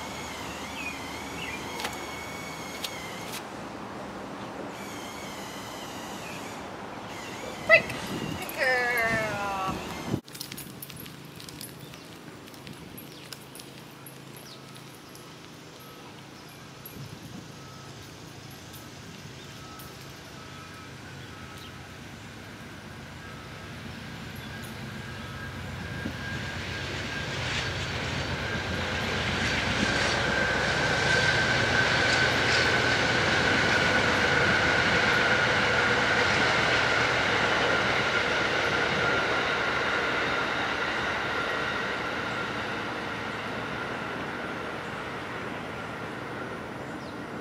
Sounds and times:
Railroad car, train wagon: 0.0s - 47.4s.

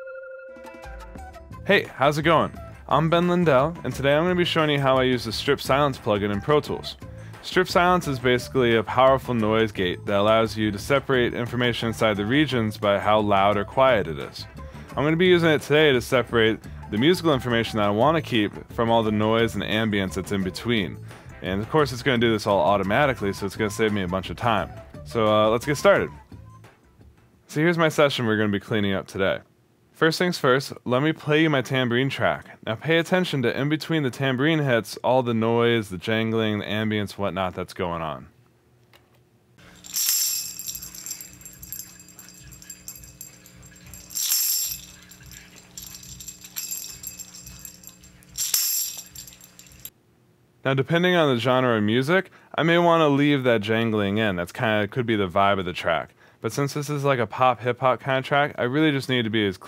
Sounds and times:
Music: 0.0s - 27.4s
Speech: 1.7s - 26.2s, 27.5s - 38.4s, 50.6s - 59.6s.

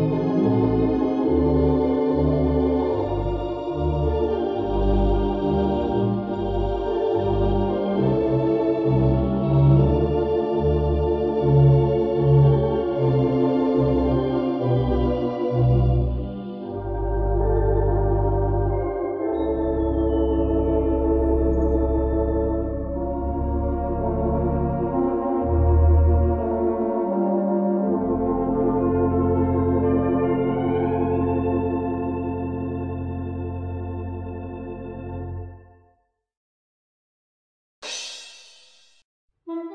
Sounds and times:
Hammond organ: 0.0s - 35.7s.

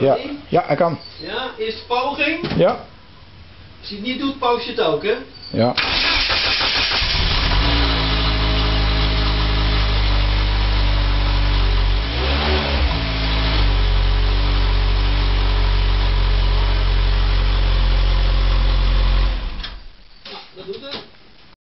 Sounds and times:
Speech: 3.8s - 5.8s, 20.3s - 21.1s
Vehicle: 6.6s - 19.7s.

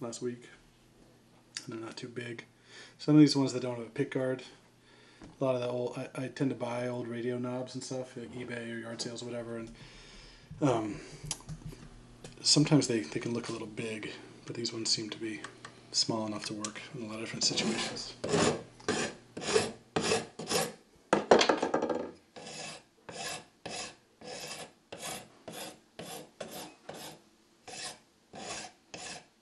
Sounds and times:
Rub: 17.4s - 20.8s, 22.4s - 29.3s
Filing (rasp): 17.5s - 20.8s, 22.4s - 29.4s.

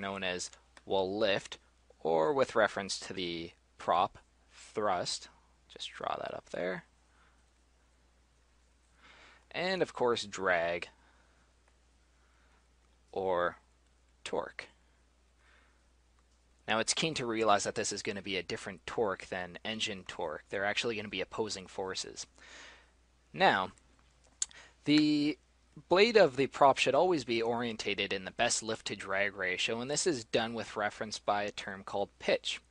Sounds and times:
Speech: 0.0s - 6.9s, 9.5s - 11.0s, 13.1s - 14.8s, 16.6s - 22.3s, 23.3s - 23.8s, 24.8s - 32.7s.

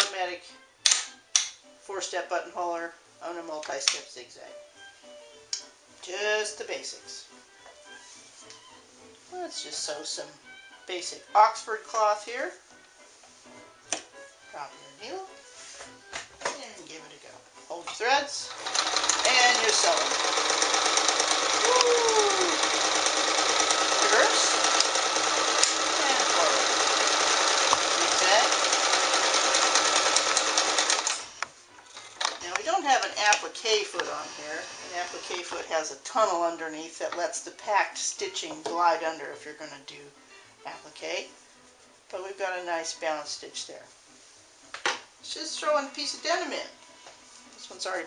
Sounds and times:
Speech: 0.0s - 0.5s, 1.9s - 4.6s, 6.0s - 7.3s, 9.3s - 12.6s, 14.5s - 15.4s, 16.5s - 18.6s, 19.2s - 20.1s, 24.0s - 24.6s, 25.9s - 26.7s, 28.0s - 28.6s, 32.4s - 41.3s, 42.1s - 43.9s, 45.2s - 46.8s, 47.6s - 48.0s
Sewing machine: 18.5s - 31.4s, 34.2s - 35.4s.

